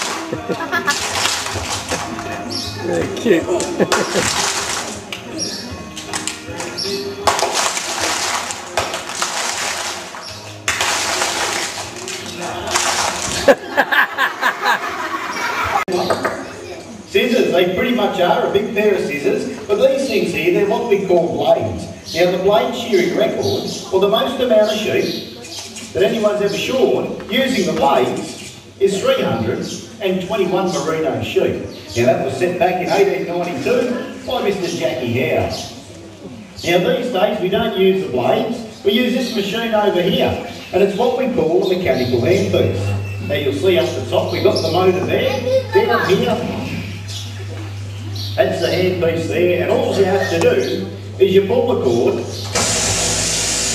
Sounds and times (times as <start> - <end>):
Music: 0.0 - 14.1.